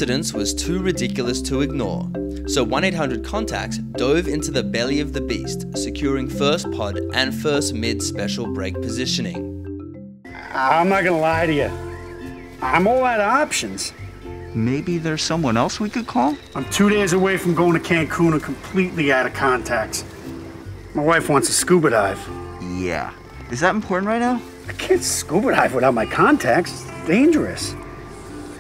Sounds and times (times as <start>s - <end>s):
Speech: 0.0s - 9.4s, 10.4s - 11.8s, 12.6s - 13.9s, 14.6s - 20.0s, 21.0s - 27.8s
Music: 0.0s - 28.6s
Outside, rural or natural: 9.5s - 28.6s
Animal: 10.3s - 11.8s.